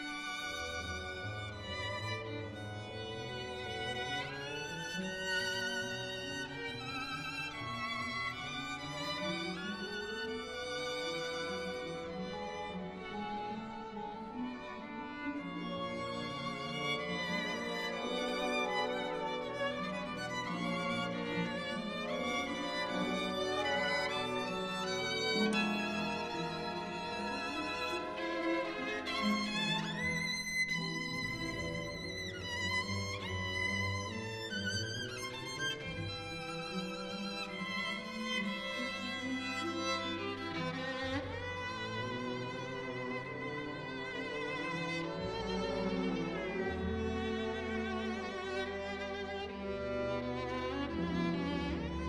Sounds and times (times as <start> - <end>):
Violin, fiddle: 0.0 - 52.0.